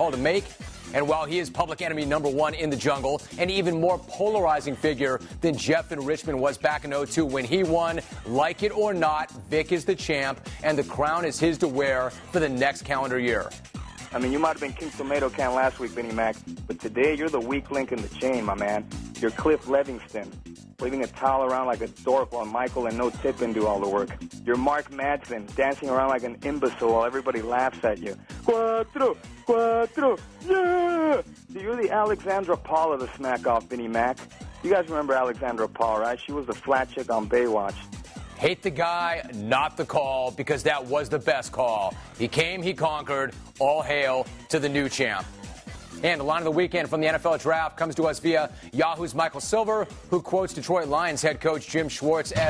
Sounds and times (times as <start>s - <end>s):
Music: 0.0s - 52.5s
Speech: 1.0s - 13.4s, 14.2s - 37.8s, 38.4s - 45.3s, 46.0s - 52.5s.